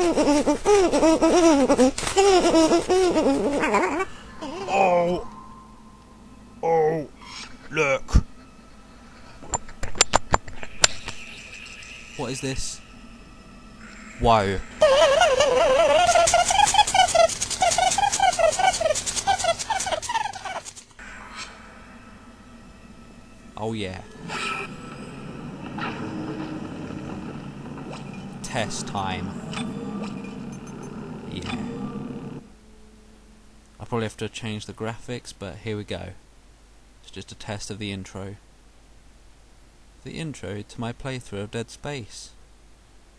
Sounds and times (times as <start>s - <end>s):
Speech: 14.2s - 14.6s, 23.6s - 24.0s, 31.3s - 31.7s, 33.8s - 36.2s, 37.1s - 38.4s, 40.0s - 42.4s.